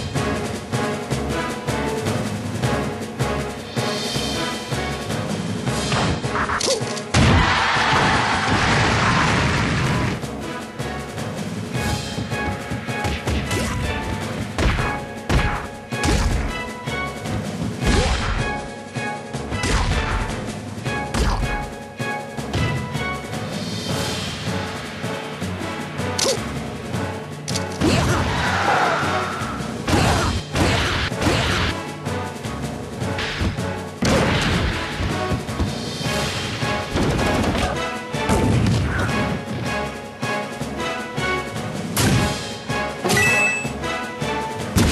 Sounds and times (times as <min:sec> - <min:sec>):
Music: 0:00.0 - 0:44.9.